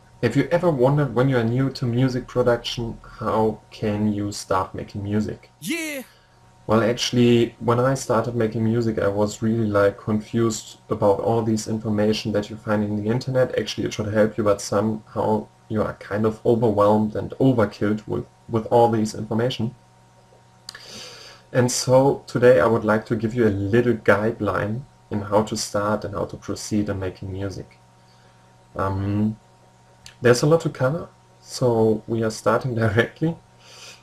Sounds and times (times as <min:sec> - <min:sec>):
Speech: 0:00.2 - 0:06.1, 0:06.7 - 0:19.8, 0:21.6 - 0:27.8, 0:28.8 - 0:29.4, 0:30.1 - 0:33.4.